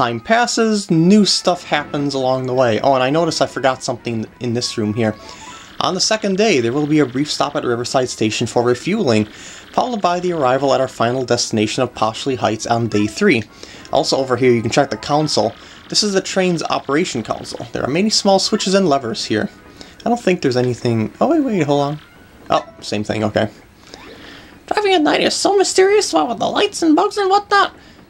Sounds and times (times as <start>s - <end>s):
Speech: 0.0s - 23.6s, 24.7s - 27.8s.